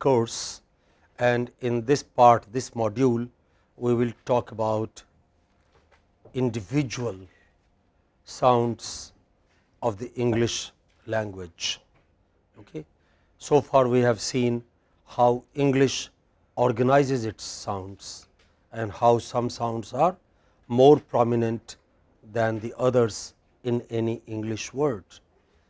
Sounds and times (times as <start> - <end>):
Speech: 0.0 - 0.6, 1.2 - 5.1, 6.3 - 7.3, 8.3 - 9.2, 9.8 - 11.9, 12.6 - 25.2.